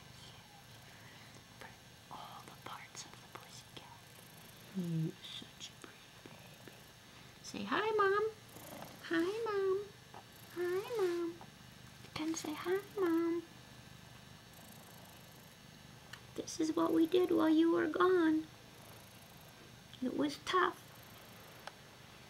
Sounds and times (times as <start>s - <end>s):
Purr: 2.4s - 7.0s, 8.2s - 11.6s, 14.2s - 15.7s, 18.3s - 21.8s
Speech: 9.0s - 9.9s, 10.6s - 11.4s, 12.2s - 13.5s, 16.4s - 18.5s, 20.0s - 20.8s.